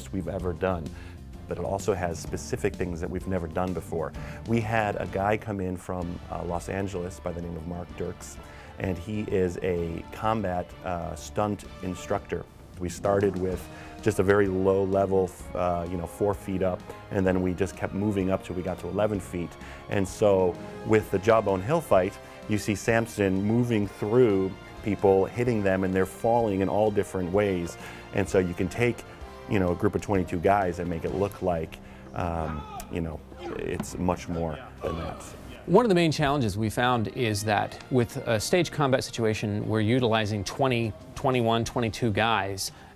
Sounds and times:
Speech: 0.0 - 0.9, 1.5 - 42.8
Music: 0.0 - 42.9.

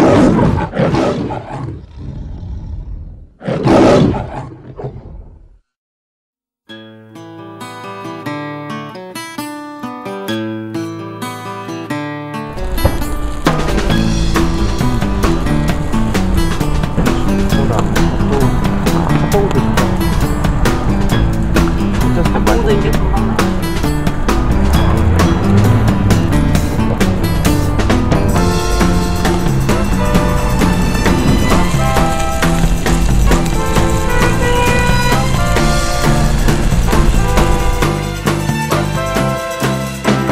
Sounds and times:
Music: 6.6 - 40.3.

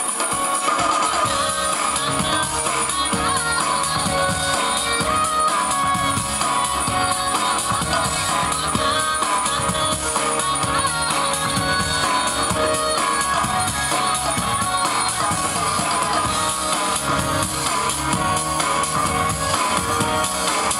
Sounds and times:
Music: 0.0 - 20.7.

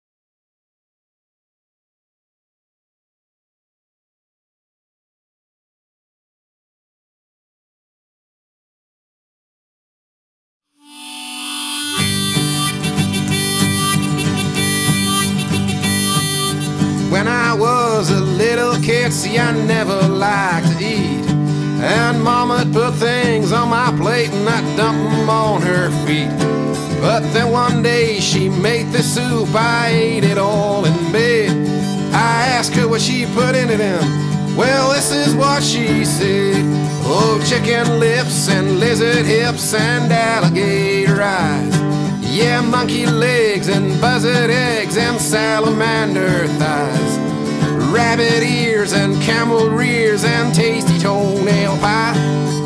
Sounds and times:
Music: 10.6 - 52.6.

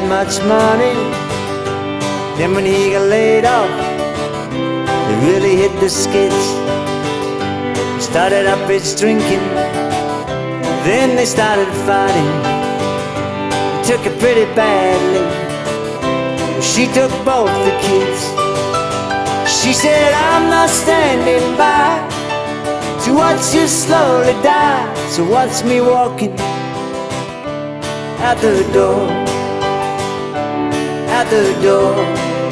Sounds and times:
Music: 0.0 - 32.5.

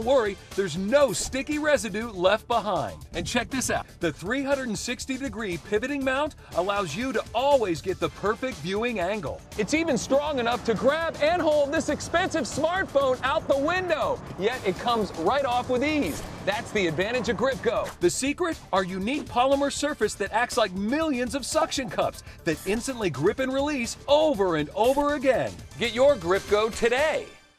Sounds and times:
Speech: 0.0 - 27.4
Music: 0.0 - 27.5.

